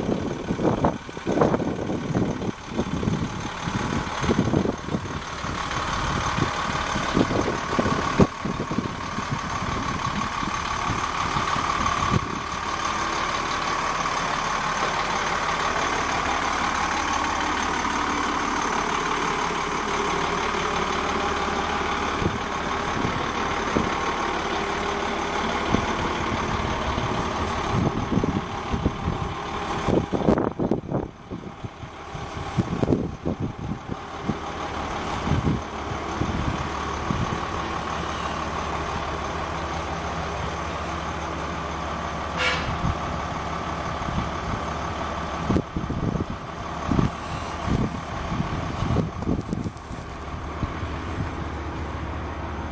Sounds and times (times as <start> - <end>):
Idling: 0.0 - 52.7
Medium engine (mid frequency): 0.0 - 52.7
Vehicle: 0.0 - 52.7.